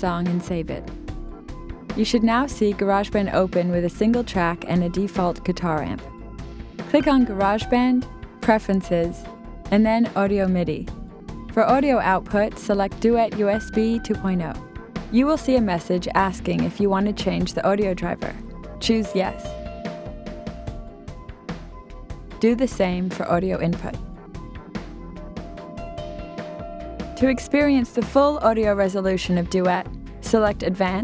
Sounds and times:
Speech: 0.0 - 0.9, 2.0 - 6.0, 6.9 - 10.9, 11.6 - 19.6, 22.4 - 24.0, 27.2 - 31.0
Music: 0.0 - 31.0.

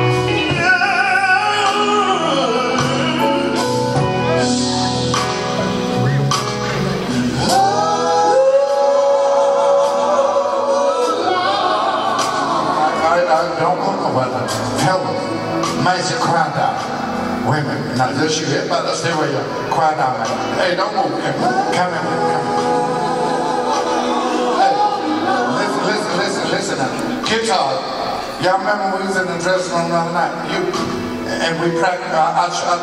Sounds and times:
Gospel music: 0.0 - 32.8
Singing: 7.4 - 13.6, 20.6 - 26.5.

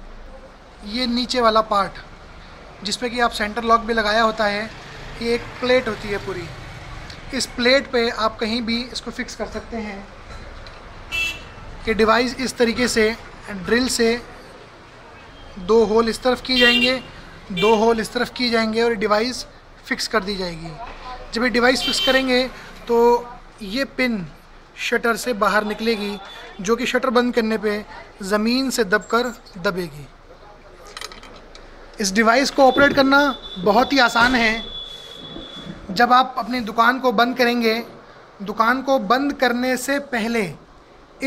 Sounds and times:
Vehicle: 0.0 - 41.2
Speech: 0.4 - 2.1, 2.8 - 6.6, 7.3 - 10.2, 11.8 - 14.4, 15.6 - 31.0, 32.0 - 34.7, 35.9 - 40.6.

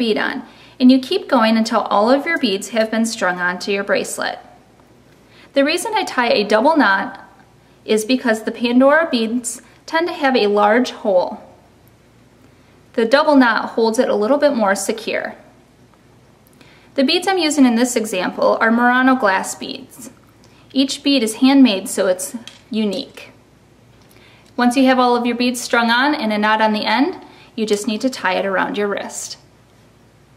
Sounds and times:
Speech: 0.0 - 4.6, 5.6 - 11.6, 13.0 - 15.5, 17.0 - 20.2, 20.8 - 23.4, 24.6 - 29.5.

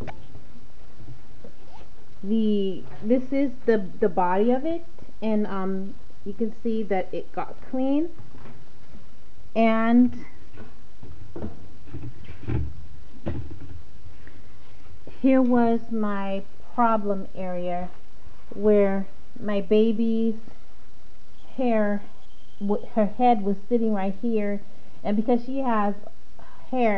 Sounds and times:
Speech: 2.2 - 8.2, 9.6 - 10.3, 15.1 - 20.4, 21.5 - 22.0, 22.6 - 26.9.

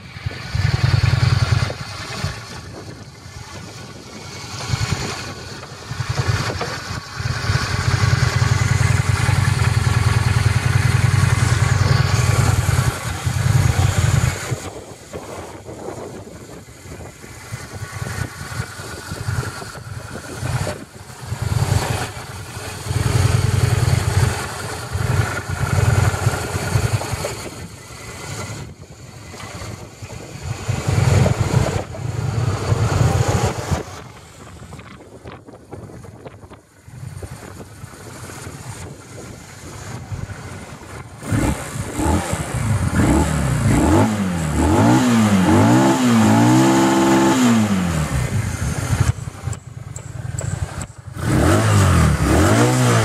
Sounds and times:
Motorcycle: 0.0 - 53.0
Accelerating, revving, vroom: 41.2 - 48.3, 51.2 - 53.0.

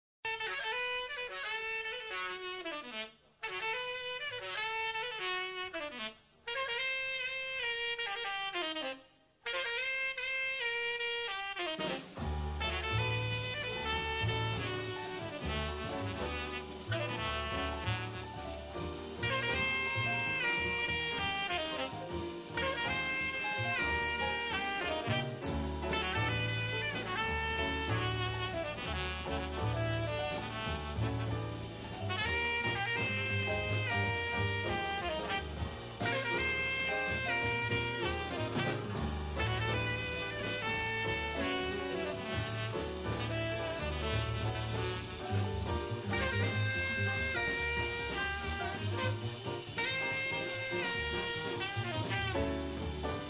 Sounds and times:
Brass instrument: 0.2 - 53.2
Saxophone: 0.2 - 53.2.

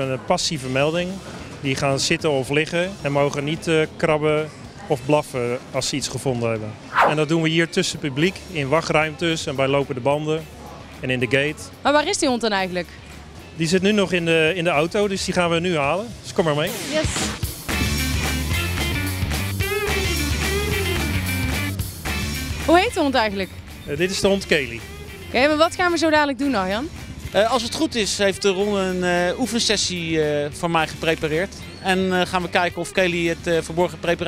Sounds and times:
Music: 0.0 - 34.2.

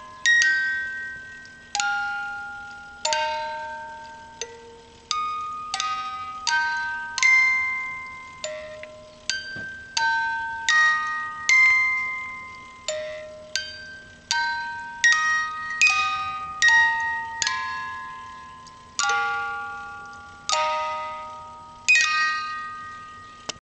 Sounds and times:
Music: 0.0 - 23.6.

